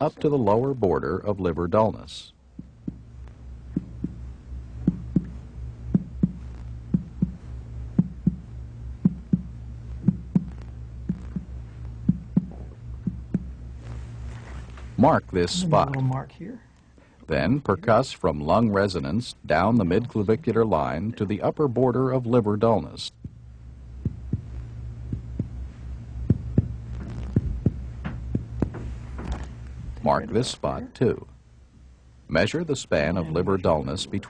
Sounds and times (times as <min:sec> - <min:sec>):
Speech: 0:00.0 - 0:02.4, 0:15.0 - 0:16.7, 0:17.3 - 0:23.2, 0:30.0 - 0:31.3, 0:32.3 - 0:34.2.